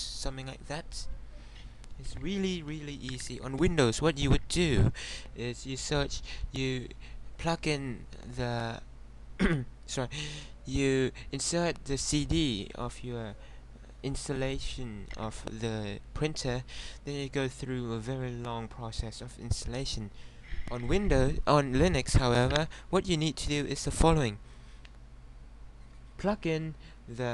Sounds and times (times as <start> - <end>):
Speech: 0.0 - 1.1, 2.0 - 13.4, 14.0 - 24.4, 26.2 - 27.3.